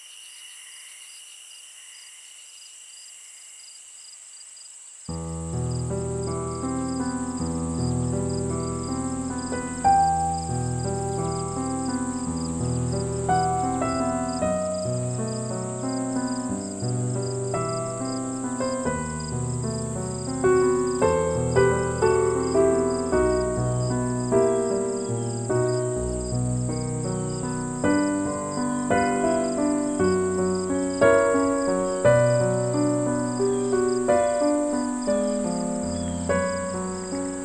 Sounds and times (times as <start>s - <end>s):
New-age music: 5.2s - 37.4s.